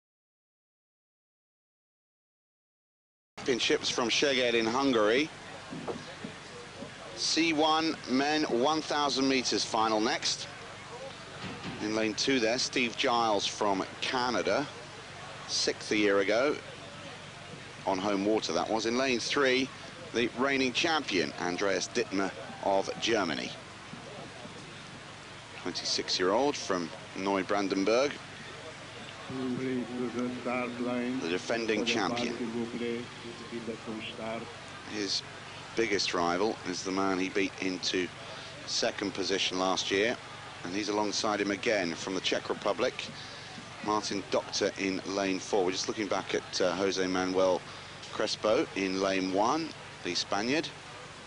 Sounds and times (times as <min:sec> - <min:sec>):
Speech: 0:03.4 - 0:05.4, 0:06.1 - 0:11.2, 0:11.8 - 0:23.6, 0:25.6 - 0:50.8.